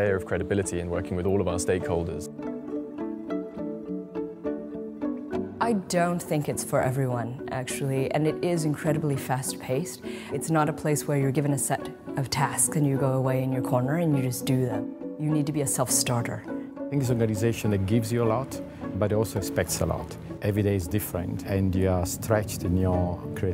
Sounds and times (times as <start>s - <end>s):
Music: 0.0s - 23.5s.